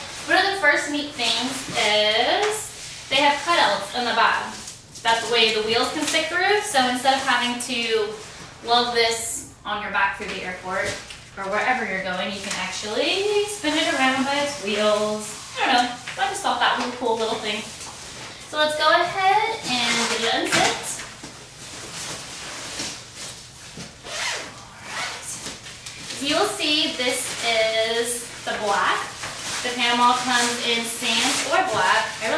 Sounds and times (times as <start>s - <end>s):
Speech: 0.3s - 17.8s, 18.5s - 21.1s, 26.1s - 32.3s.